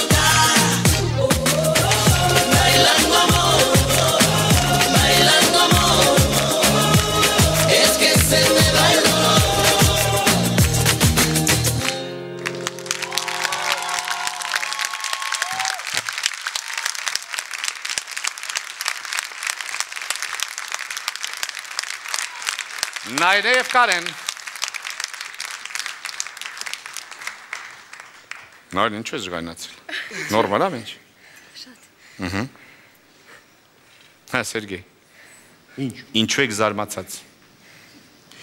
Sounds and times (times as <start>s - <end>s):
Music: 0.0s - 14.2s.